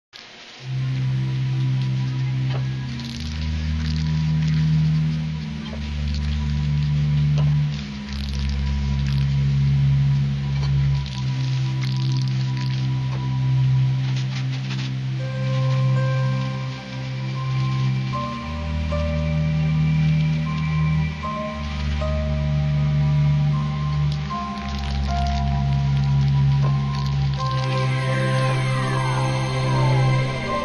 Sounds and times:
Music: 0:00.4 - 0:30.6.

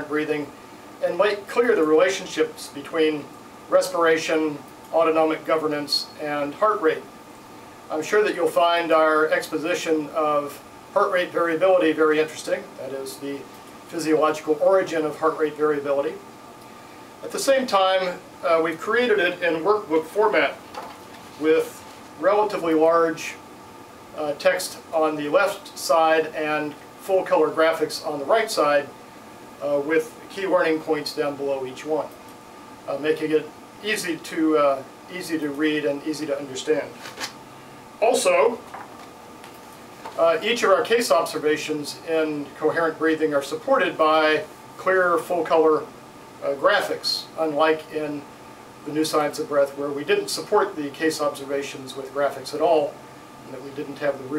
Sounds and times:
Speech: 0:00.0 - 0:07.1, 0:07.9 - 0:16.3, 0:17.2 - 0:20.6, 0:21.4 - 0:23.5, 0:24.2 - 0:29.0, 0:29.6 - 0:32.2, 0:32.9 - 0:37.1, 0:38.0 - 0:38.7, 0:40.2 - 0:54.3.

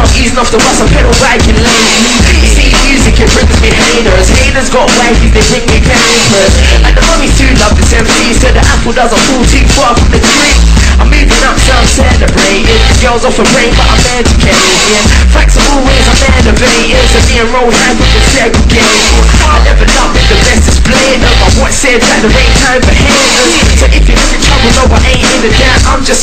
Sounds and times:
Music: 0:00.0 - 0:26.2.

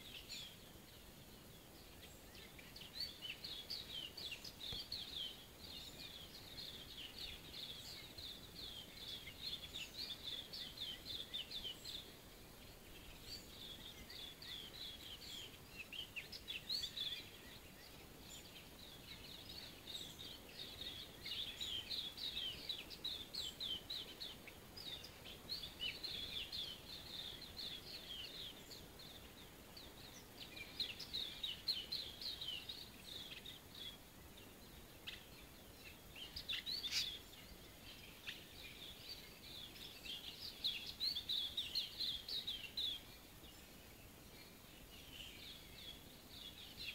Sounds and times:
Chirp, tweet: 0:00.0 - 0:46.9.

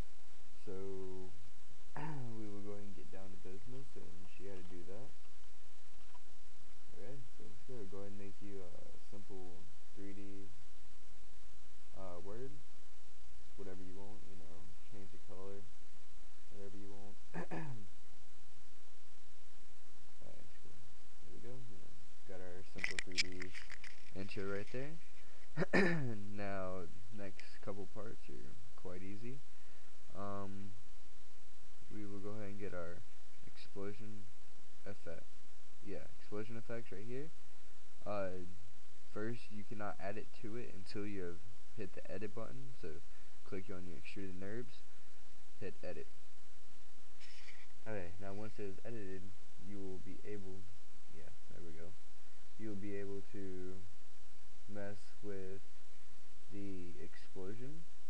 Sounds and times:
Speech: 0:00.6 - 0:01.4, 0:02.0 - 0:05.2, 0:06.9 - 0:10.5, 0:12.0 - 0:12.6, 0:13.6 - 0:15.7, 0:16.5 - 0:17.8, 0:20.2 - 0:20.6, 0:21.3 - 0:25.0, 0:25.6 - 0:29.4, 0:30.1 - 0:30.8, 0:31.9 - 0:34.2, 0:34.8 - 0:35.2, 0:35.9 - 0:37.3, 0:38.0 - 0:38.5, 0:39.1 - 0:44.8, 0:45.6 - 0:46.1, 0:47.8 - 0:52.0, 0:52.6 - 0:53.8, 0:54.7 - 0:55.6, 0:56.5 - 0:57.8.

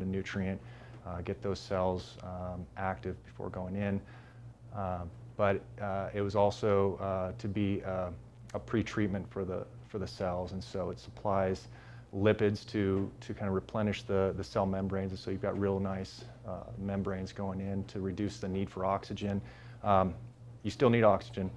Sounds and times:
Speech: 0:00.0 - 0:04.1, 0:04.7 - 0:21.5.

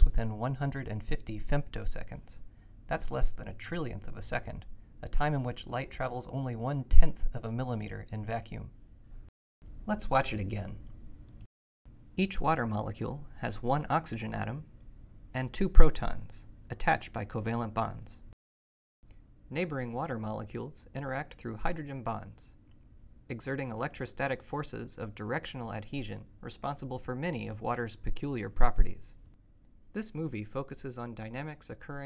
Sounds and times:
Speech: 0:00.0 - 0:08.8, 0:09.9 - 0:10.8, 0:12.2 - 0:14.7, 0:15.4 - 0:18.3, 0:19.5 - 0:22.6, 0:23.3 - 0:29.2, 0:30.0 - 0:32.0.

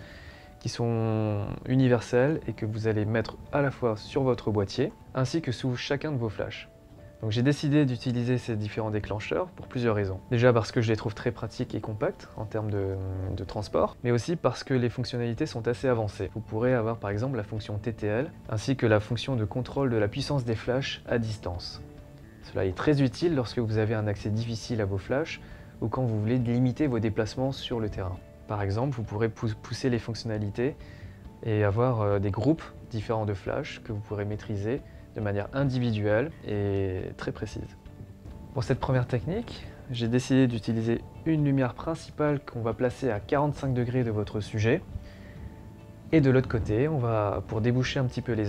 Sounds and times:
Music: 0:00.0 - 0:48.4
Speech: 0:00.6 - 0:21.8, 0:22.4 - 0:30.8, 0:31.4 - 0:37.8, 0:38.5 - 0:44.8, 0:46.1 - 0:48.4.

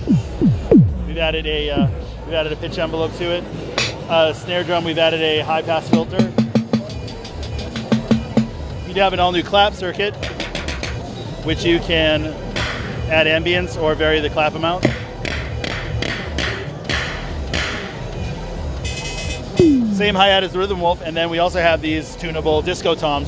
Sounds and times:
Speech: 0:01.1 - 0:06.4, 0:08.9 - 0:10.2, 0:11.4 - 0:12.4, 0:13.1 - 0:14.9, 0:19.6 - 0:23.2.

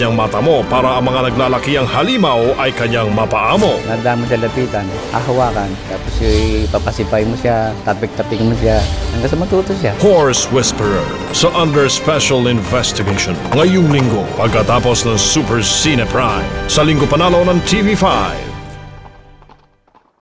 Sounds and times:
Speech: 0:00.0 - 0:18.6
Music: 0:00.0 - 0:20.1
Clip-clop: 0:12.5 - 0:15.0, 0:18.1 - 0:20.2.

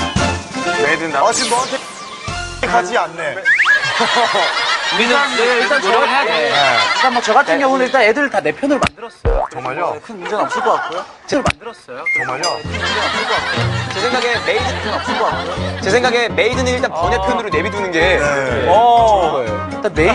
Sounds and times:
Music: 0:00.0 - 0:03.4, 0:12.2 - 0:20.1.

